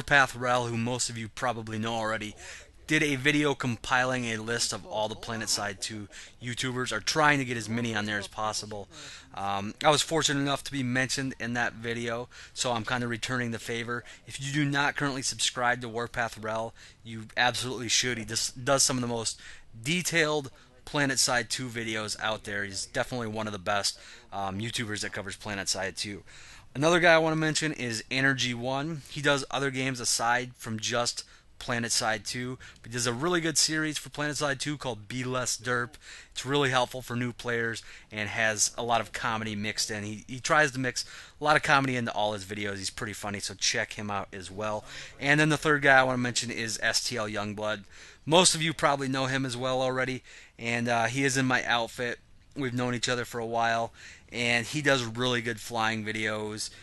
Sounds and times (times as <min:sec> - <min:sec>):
Speech: 0:00.0 - 0:56.7.